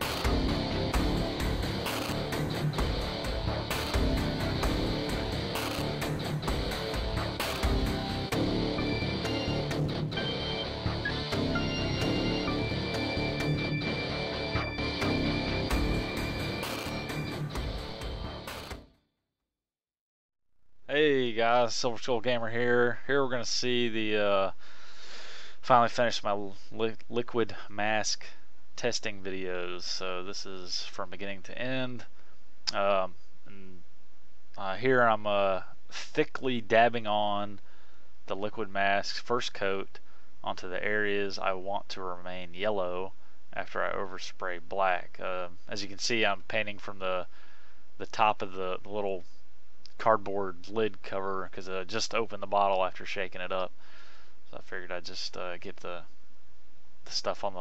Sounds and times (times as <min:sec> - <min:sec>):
Speech: 0:20.9 - 0:24.6, 0:25.6 - 0:32.1, 0:32.7 - 0:33.8, 0:34.6 - 0:37.6, 0:38.3 - 0:47.3, 0:48.0 - 0:49.2, 0:50.0 - 0:53.7, 0:54.5 - 0:56.1, 0:57.1 - 0:57.6.